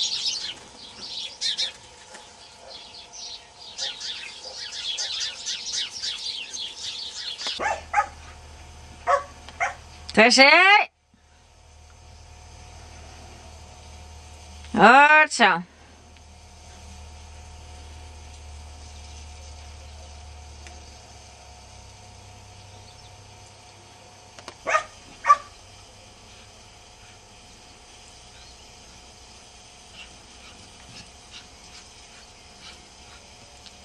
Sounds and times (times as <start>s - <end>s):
Outside, rural or natural: 0.0s - 33.8s
Bark: 3.8s - 5.2s, 7.6s - 8.2s, 9.0s - 9.8s, 24.6s - 25.5s
Bow-wow: 7.6s - 8.2s, 9.0s - 9.8s, 24.7s - 25.5s
Speech: 10.1s - 10.9s, 14.7s - 15.7s.